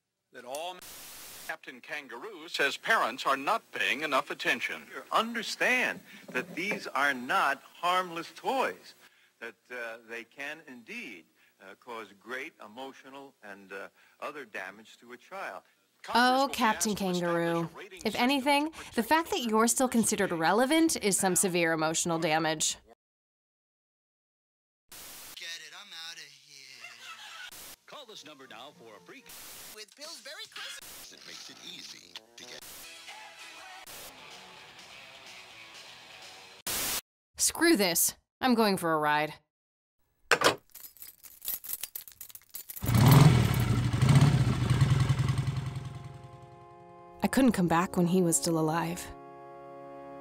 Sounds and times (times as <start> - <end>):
Speech: 1.5 - 22.9, 27.9 - 32.6, 37.4 - 39.4, 47.2 - 49.1.